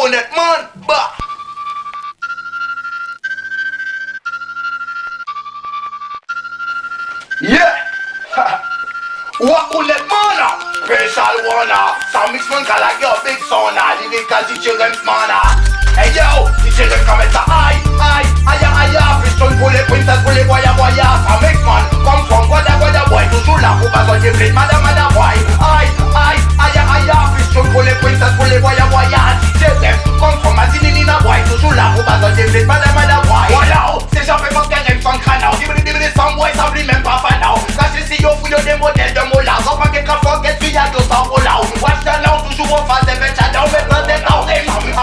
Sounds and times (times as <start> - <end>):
Music: 0.9 - 45.0.